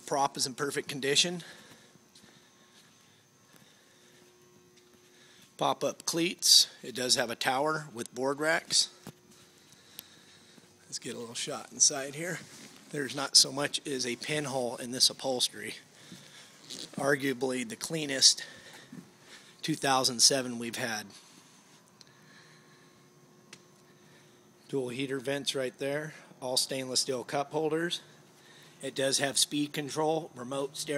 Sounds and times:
Speech: 0.0 - 1.5, 5.6 - 9.0, 10.9 - 15.8, 17.0 - 18.6, 19.6 - 21.2, 24.7 - 28.1, 28.8 - 30.9.

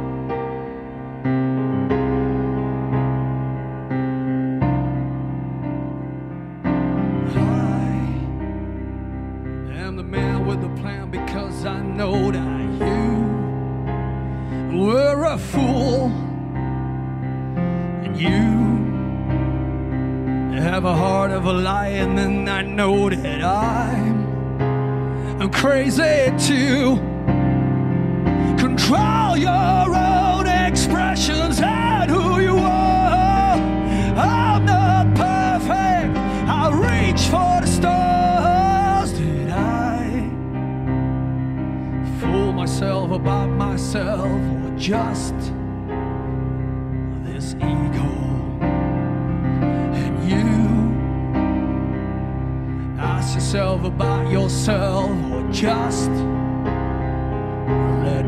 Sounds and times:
Music: 0.0 - 58.2.

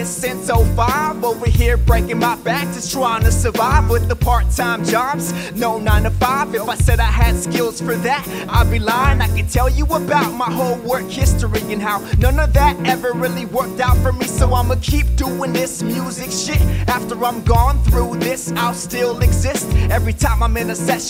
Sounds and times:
Funk: 0.0 - 21.0
Happy music: 0.0 - 21.0
Pop music: 0.0 - 21.0.

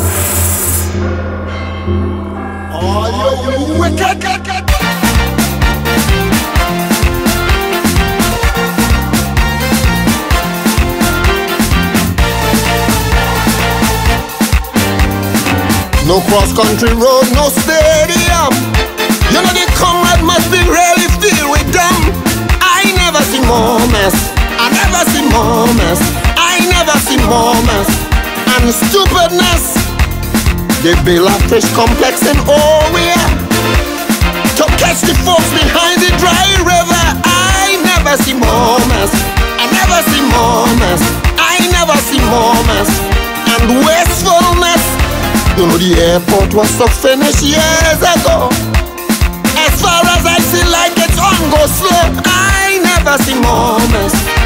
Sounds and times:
Music: 0.0 - 54.4.

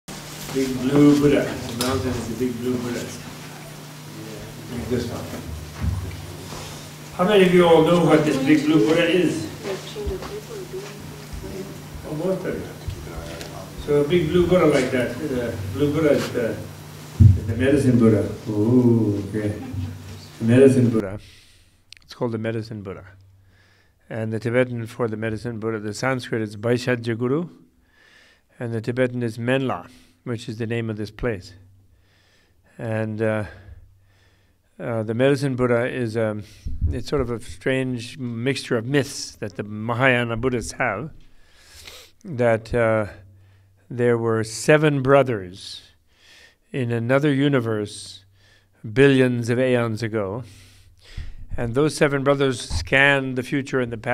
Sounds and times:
Male speech, man speaking: 0.5 - 3.3, 4.1 - 5.5, 7.2 - 9.6, 11.4 - 19.8, 20.4 - 21.2, 22.1 - 23.2, 24.1 - 27.6, 28.6 - 31.6, 32.8 - 33.6, 34.8 - 41.2, 42.3 - 43.2, 43.9 - 45.9, 46.7 - 48.2, 48.8 - 50.5, 51.6 - 54.1.

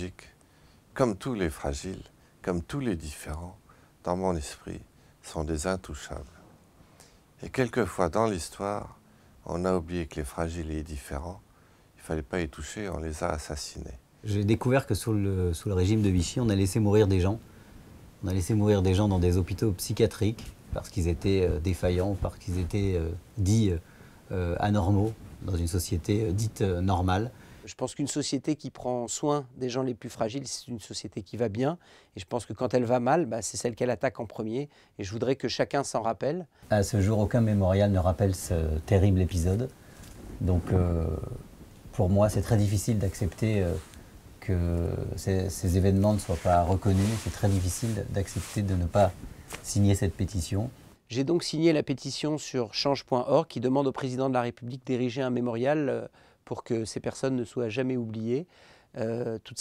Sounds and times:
Speech: 0.0 - 0.4, 1.0 - 6.4, 7.4 - 11.4, 12.0 - 17.4, 18.2 - 39.7, 40.4 - 59.6.

